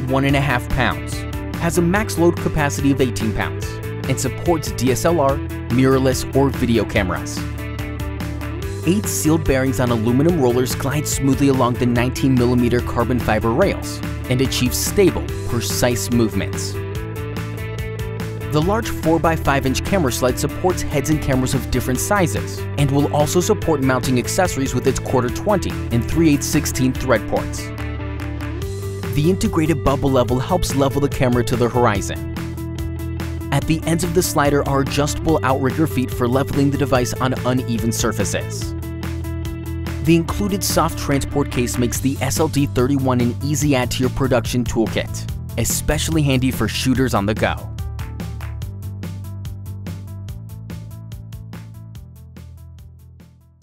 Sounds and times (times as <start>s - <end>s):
Speech: 0.0s - 7.4s, 8.9s - 16.8s, 18.5s - 27.7s, 29.2s - 32.2s, 33.5s - 38.7s, 40.0s - 47.7s
Music: 0.0s - 53.6s.